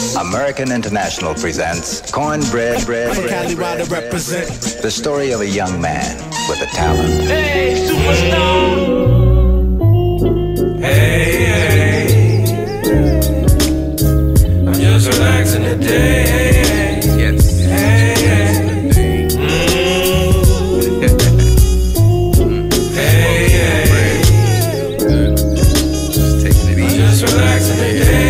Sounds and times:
Ska: 0.0 - 28.2.

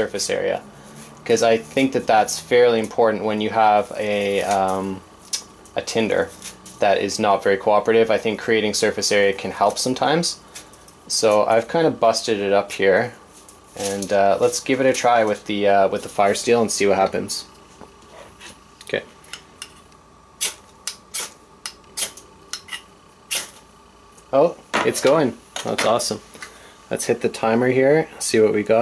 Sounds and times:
Speech: 0.0 - 0.6, 1.2 - 5.0, 5.8 - 10.4, 11.1 - 13.2, 13.8 - 17.5, 18.8 - 19.1, 24.3 - 26.2, 26.9 - 28.8.

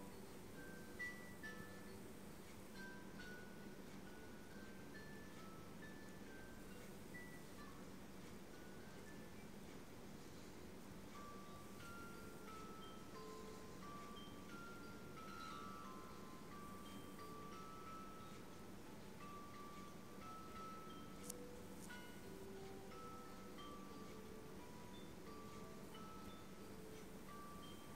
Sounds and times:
Music: 0.0 - 27.9.

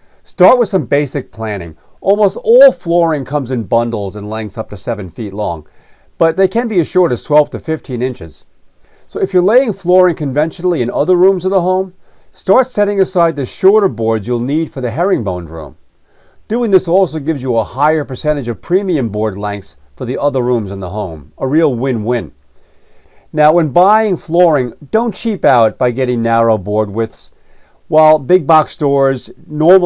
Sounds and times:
Speech: 0.3 - 8.5, 9.1 - 15.8, 16.5 - 22.4, 23.3 - 27.3, 27.9 - 29.8.

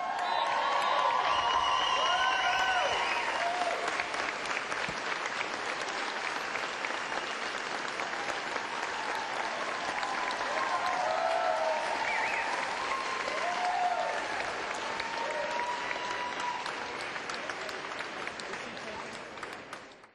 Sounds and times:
Applause: 0.0 - 20.1.

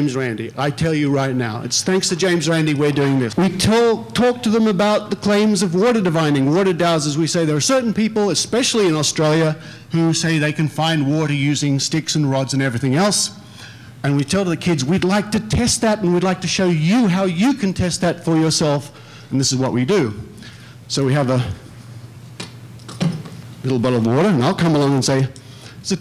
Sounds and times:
Speech: 0.0 - 13.4, 14.0 - 20.3, 20.9 - 21.6, 23.6 - 26.0.

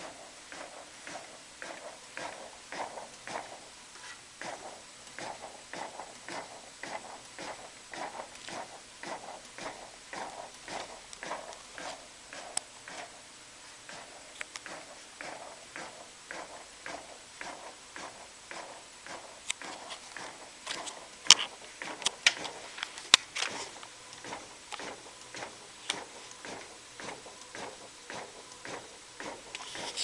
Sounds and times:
Printer: 0.0 - 30.0.

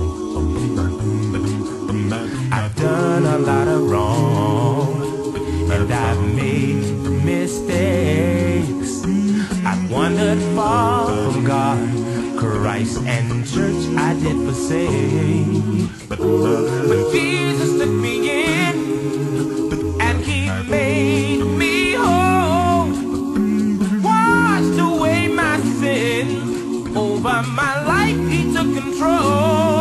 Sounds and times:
Music: 0.0 - 29.8.

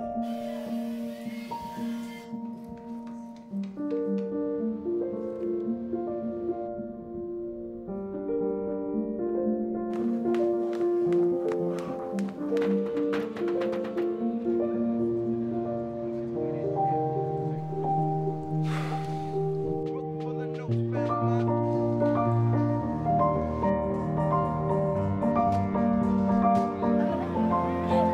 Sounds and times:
Music: 0.0 - 28.1.

